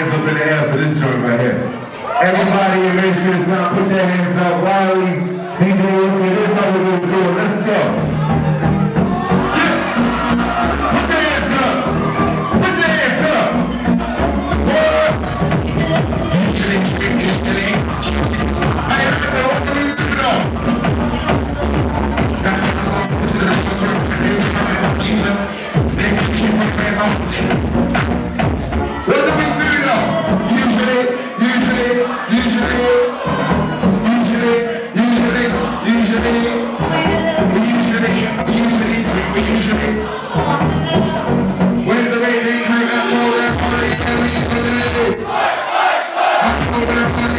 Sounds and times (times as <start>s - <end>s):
Music: 2.6s - 45.5s, 46.2s - 47.3s
Speech: 34.0s - 45.2s.